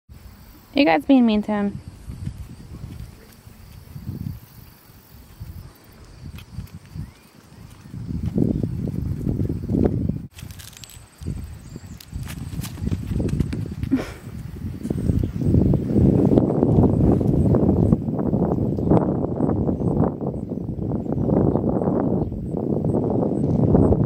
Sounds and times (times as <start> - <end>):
Speech: 0.7 - 1.8.